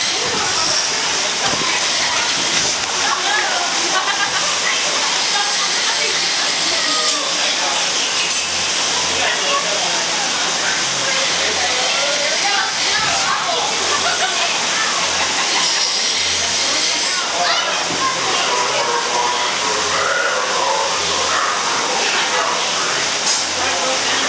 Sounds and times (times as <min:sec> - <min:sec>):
Speech: 0:00.0 - 0:24.2.